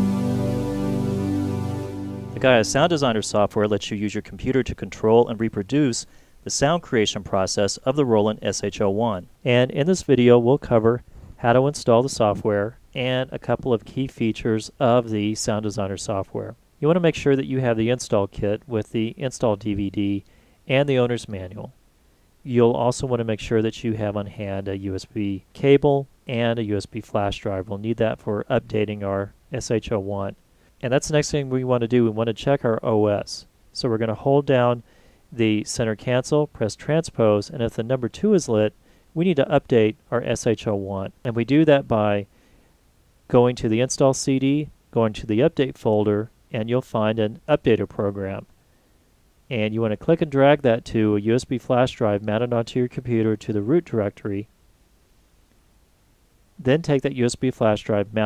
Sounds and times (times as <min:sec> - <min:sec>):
Speech: 0:02.4 - 0:21.8, 0:22.5 - 0:34.8, 0:35.4 - 0:42.3, 0:43.3 - 0:48.5, 0:49.5 - 0:54.5, 0:56.6 - 0:58.2.